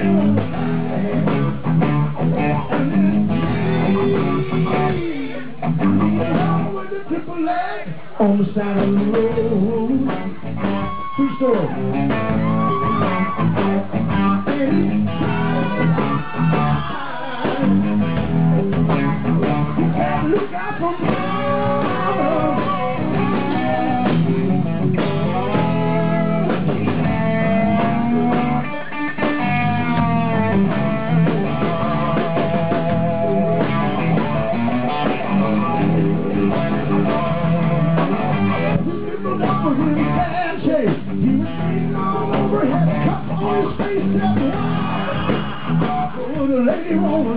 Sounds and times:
Music: 0.0s - 47.3s
Speech: 11.2s - 11.8s, 46.2s - 47.3s.

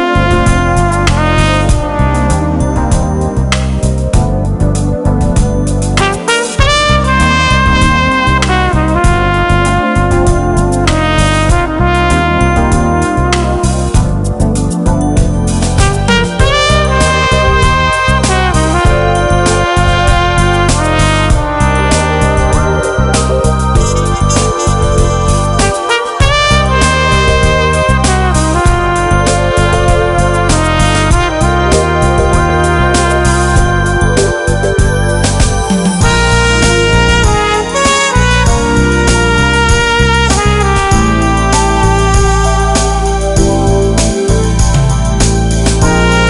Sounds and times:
Music: 0.0s - 46.2s.

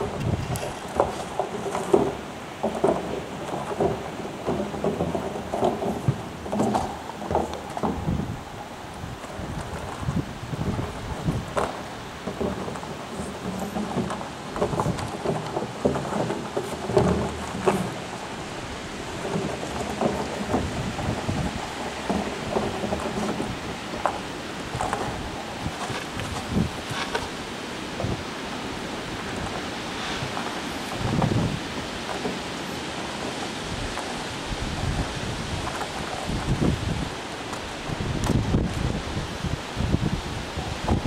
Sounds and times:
Clip-clop: 0.0s - 41.0s.

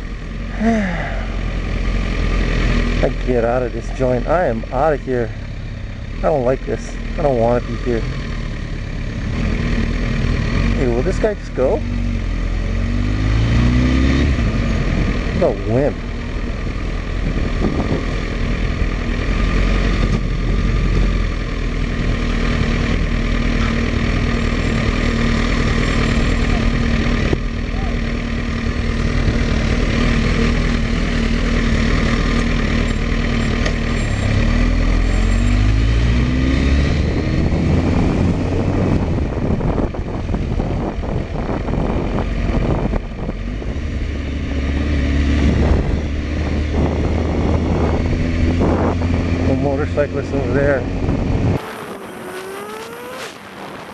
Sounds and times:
Car: 0.0s - 53.9s
Medium engine (mid frequency): 0.0s - 53.9s
Idling: 0.1s - 11.5s
Speech: 3.0s - 5.3s, 6.2s - 8.0s, 10.8s - 11.8s, 15.4s - 16.0s, 49.4s - 50.8s
Accelerating, revving, vroom: 9.2s - 16.0s, 19.1s - 21.3s, 28.7s - 39.1s, 43.8s - 53.9s.

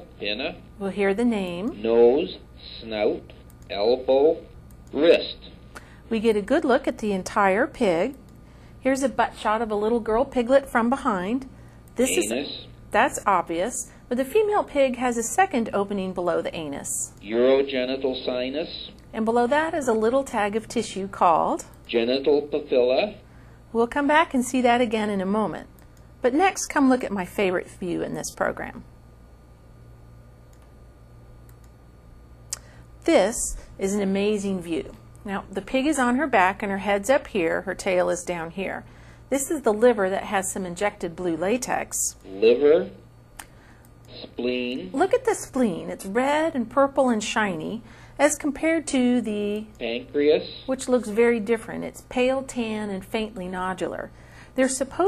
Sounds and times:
Speech: 0.2s - 8.2s, 12.0s - 23.2s, 39.4s - 43.0s, 44.1s - 55.0s.

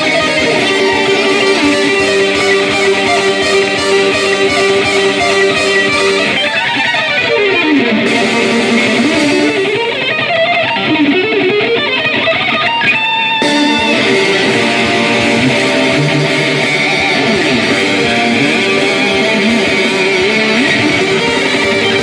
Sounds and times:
Tapping (guitar technique): 0.0s - 22.0s.

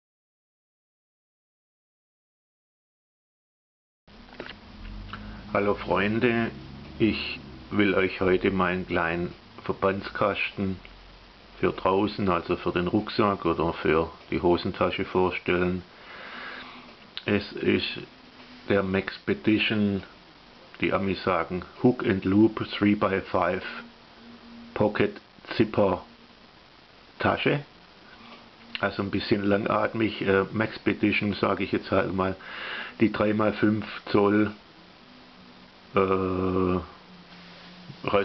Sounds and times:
Speech: 5.5s - 10.9s, 11.6s - 15.9s, 17.2s - 18.1s, 18.7s - 23.9s, 24.7s - 26.1s, 27.2s - 27.7s, 28.8s - 34.6s, 35.9s - 37.0s, 38.0s - 38.2s.

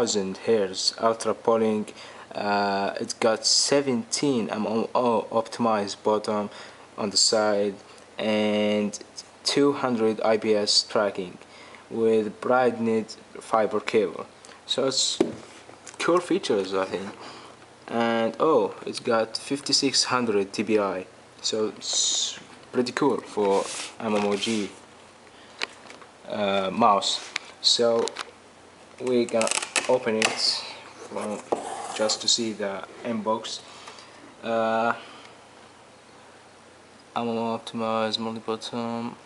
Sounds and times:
Speech: 0.0s - 15.4s, 16.0s - 17.2s, 17.9s - 24.8s, 26.2s - 28.2s, 29.0s - 33.7s, 34.4s - 35.0s, 37.2s - 39.2s.

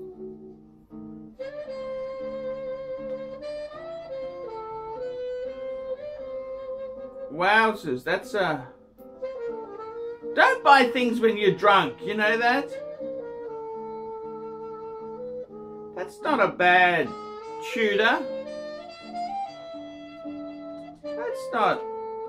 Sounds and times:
Saxophone: 0.0s - 22.2s
Speech: 7.3s - 8.7s, 10.4s - 12.7s, 16.0s - 18.3s, 21.2s - 21.8s.

